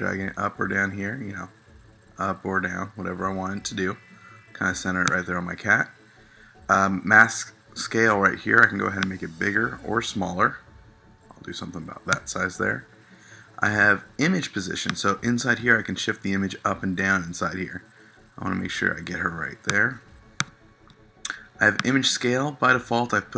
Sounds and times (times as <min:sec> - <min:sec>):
Speech: 0:00.0 - 0:01.5, 0:02.2 - 0:05.9, 0:06.7 - 0:10.7, 0:11.3 - 0:12.9, 0:13.6 - 0:17.8, 0:18.4 - 0:20.0, 0:21.3 - 0:23.3.